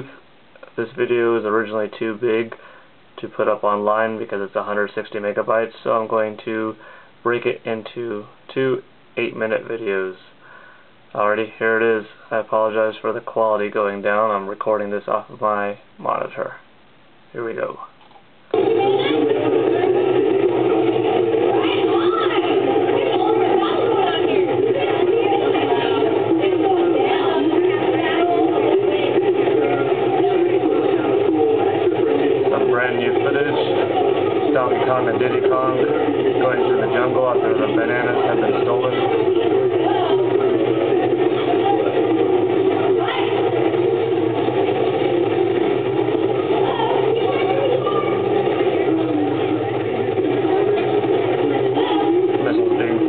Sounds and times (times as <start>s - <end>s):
Speech: 0.0s - 2.6s, 3.2s - 10.4s, 11.2s - 16.6s, 17.3s - 18.0s, 21.5s - 40.4s.